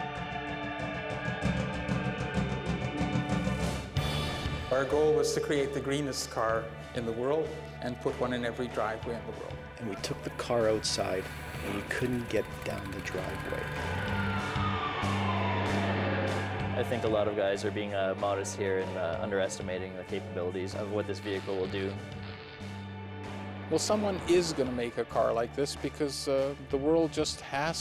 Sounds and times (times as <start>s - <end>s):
Music: 0.0s - 27.8s
Speech: 4.8s - 13.6s, 16.8s - 22.0s, 23.7s - 27.8s.